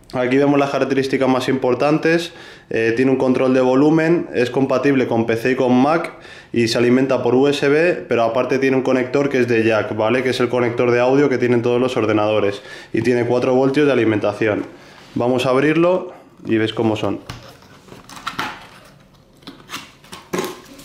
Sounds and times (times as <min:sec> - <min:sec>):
Speech: 0:00.1 - 0:17.4.